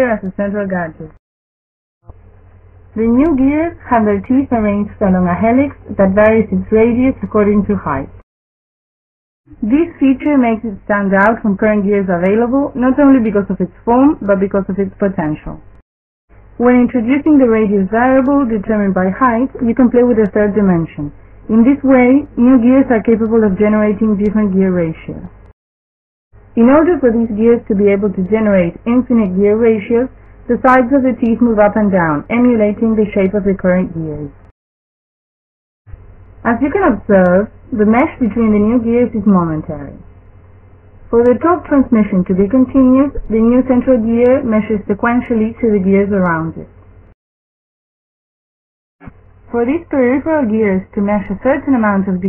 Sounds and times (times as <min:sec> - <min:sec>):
Speech: 0:00.0 - 0:01.2, 0:03.0 - 0:08.2, 0:09.5 - 0:15.7, 0:16.6 - 0:25.4, 0:26.6 - 0:34.4, 0:36.5 - 0:40.0, 0:41.2 - 0:46.7, 0:49.5 - 0:52.2.